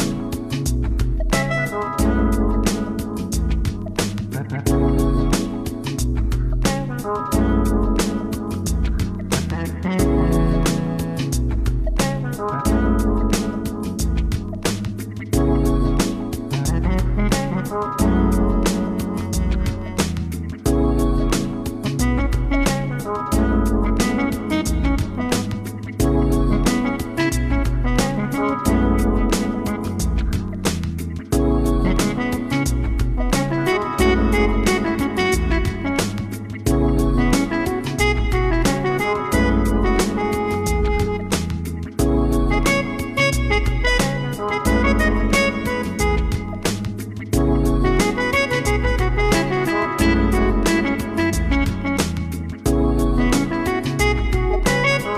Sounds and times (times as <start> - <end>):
Independent music: 0.0 - 55.1
Jazz: 0.0 - 55.1
Soundtrack music: 0.0 - 55.1.